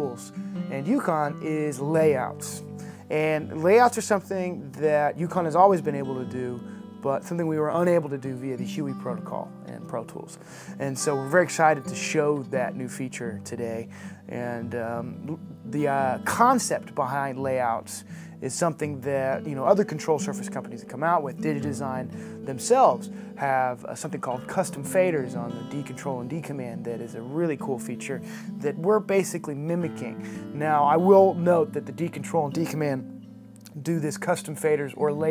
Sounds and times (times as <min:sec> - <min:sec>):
Speech: 0:00.0 - 0:33.0, 0:33.7 - 0:35.3
Music: 0:00.0 - 0:35.3.